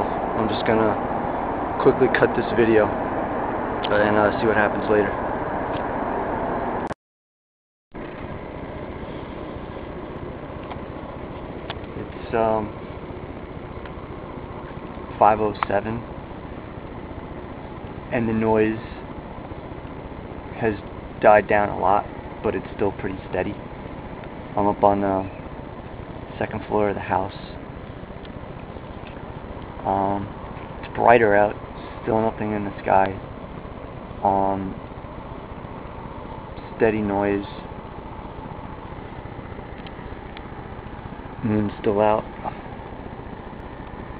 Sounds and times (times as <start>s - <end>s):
Speech: 0.4s - 1.0s, 1.8s - 3.0s, 3.9s - 5.2s, 12.0s - 12.8s, 15.2s - 16.1s, 18.1s - 19.0s, 20.6s - 23.6s, 24.6s - 25.4s, 26.3s - 27.6s, 29.8s - 30.3s, 30.9s - 33.2s, 34.2s - 34.8s, 36.8s - 37.7s, 41.4s - 42.6s.